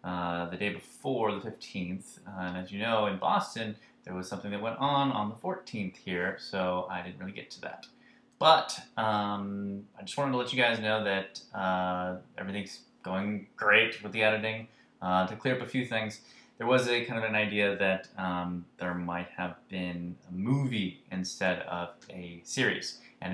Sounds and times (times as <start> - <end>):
Speech: 0.0 - 23.3.